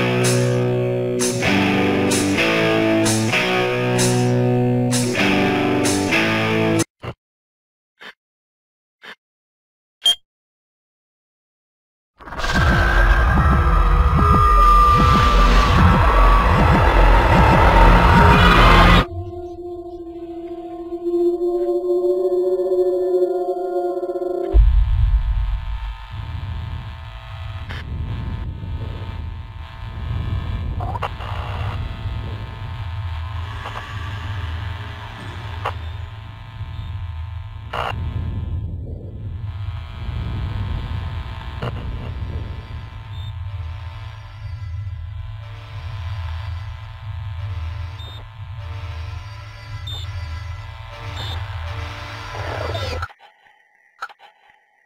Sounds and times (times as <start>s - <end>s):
Music: 0.0s - 6.9s, 12.5s - 25.9s, 43.6s - 53.1s.